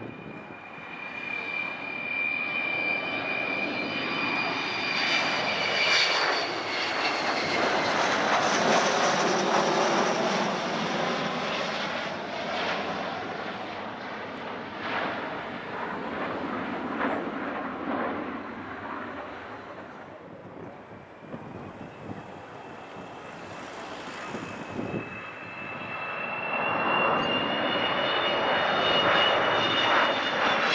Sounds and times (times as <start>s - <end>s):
Fixed-wing aircraft, airplane: 0.0s - 30.7s.